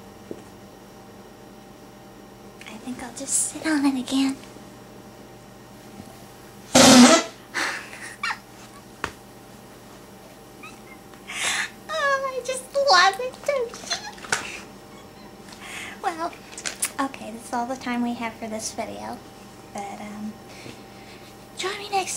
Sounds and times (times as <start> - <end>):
Inside, small room: 0.0 - 22.1
Speech: 2.6 - 4.4, 11.9 - 14.1, 16.0 - 19.2, 19.8 - 20.4, 21.6 - 22.1
Laughter: 7.6 - 8.9, 10.6 - 11.7, 13.9 - 15.5.